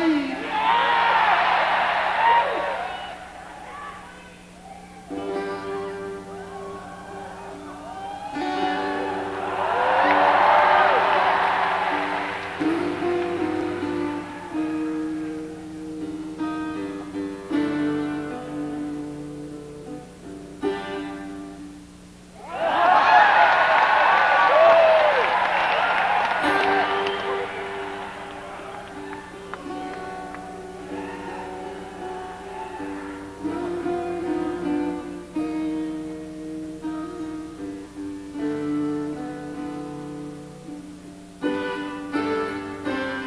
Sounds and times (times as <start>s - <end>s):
Music: 0.0s - 3.4s, 4.2s - 22.5s, 24.6s - 43.2s.